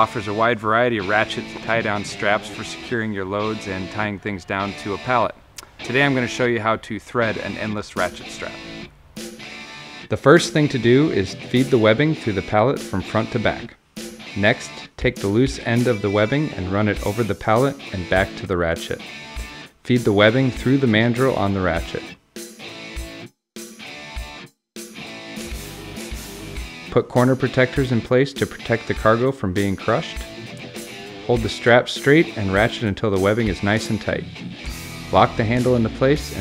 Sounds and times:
Speech: 0.0s - 8.6s, 10.1s - 13.8s, 14.4s - 19.0s, 19.9s - 22.1s, 26.9s - 30.2s, 31.3s - 34.4s, 35.1s - 36.4s
Music: 0.0s - 36.4s.

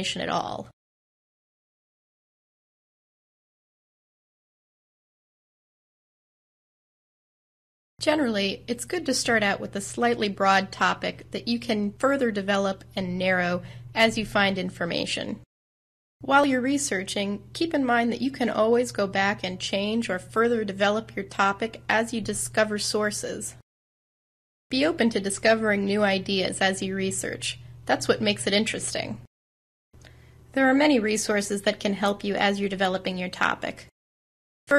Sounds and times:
Speech: 0.0s - 0.8s, 8.0s - 15.5s, 16.2s - 23.6s, 24.7s - 29.3s, 30.5s - 33.9s.

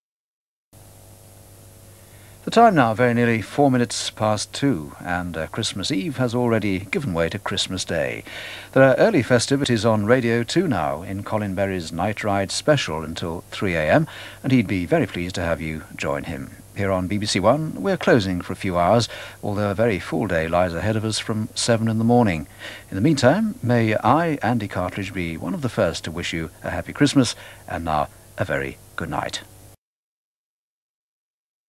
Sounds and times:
Speech: 2.5s - 29.5s.

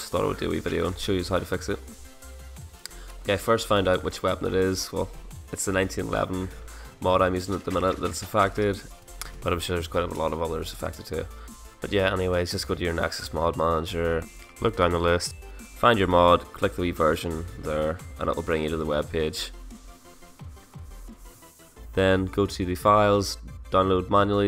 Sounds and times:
Speech: 0.0s - 1.9s, 3.3s - 19.6s, 22.0s - 24.4s
Music: 0.0s - 24.4s.

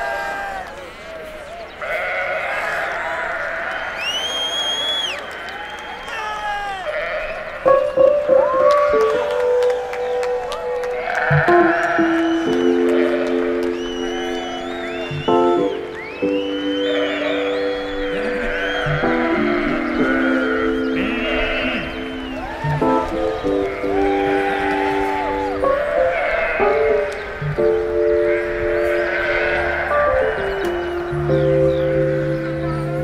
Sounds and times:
Music: 7.7s - 33.0s.

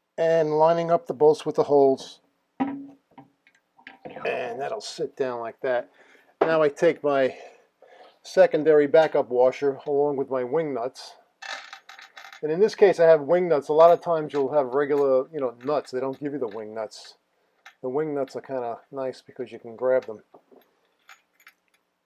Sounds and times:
Inside, small room: 0.0s - 22.0s
Speech: 0.2s - 2.2s, 4.2s - 7.5s, 8.2s - 11.2s, 12.4s - 17.2s, 17.8s - 20.3s.

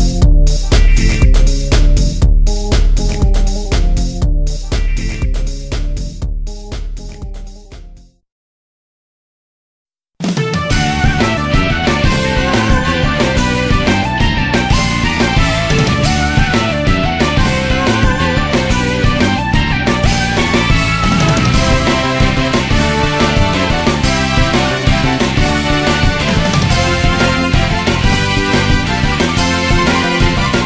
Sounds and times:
Music: 0.0s - 8.2s, 10.2s - 30.6s.

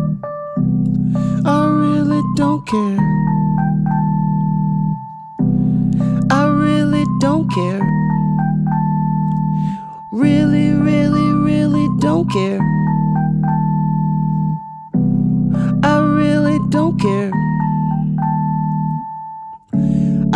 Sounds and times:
Inside, small room: 0.0s - 20.3s
Music: 0.0s - 20.3s.

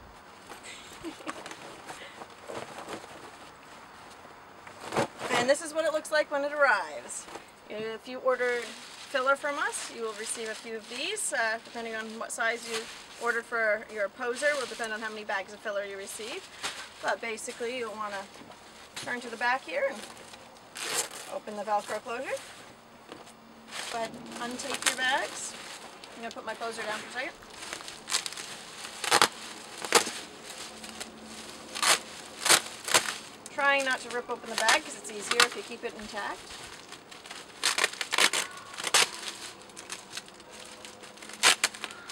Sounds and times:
Speech: 5.3s - 16.4s, 17.0s - 18.3s, 19.1s - 20.0s, 21.3s - 22.4s, 23.9s - 25.6s, 26.2s - 27.4s, 33.5s - 36.4s.

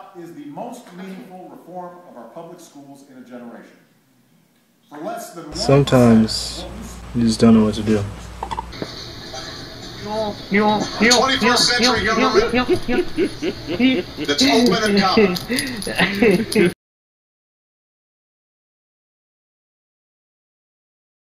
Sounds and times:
Male speech, man speaking: 0.0s - 3.8s, 4.9s - 8.3s, 10.6s - 12.7s, 14.3s - 15.4s.

